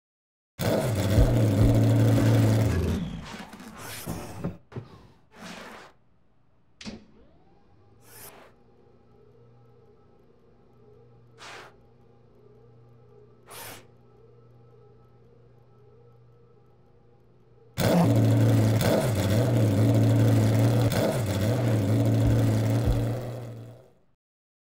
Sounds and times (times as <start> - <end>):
Car: 0.6 - 3.6, 17.8 - 24.0.